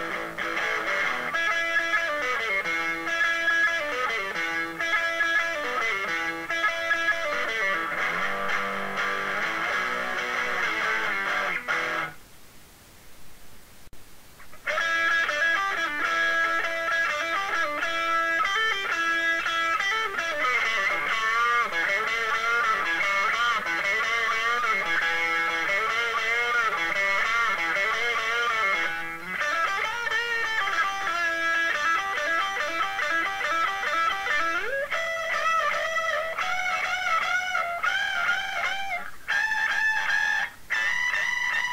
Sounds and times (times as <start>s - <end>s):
Electric guitar: 0.0s - 12.2s, 14.4s - 41.7s.